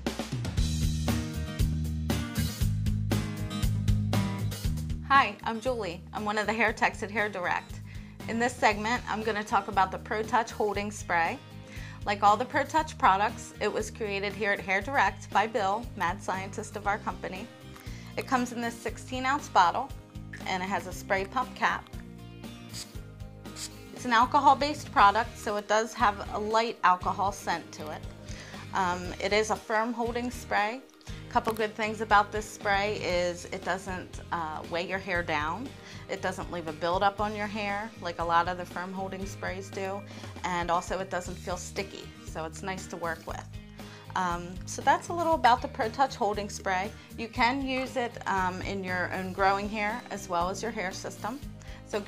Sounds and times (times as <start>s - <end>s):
Music: 0.0s - 52.0s
Speech: 5.1s - 7.7s, 8.3s - 11.4s, 12.0s - 17.5s, 18.2s - 21.9s, 24.0s - 28.1s, 28.7s - 43.5s, 44.1s - 52.0s.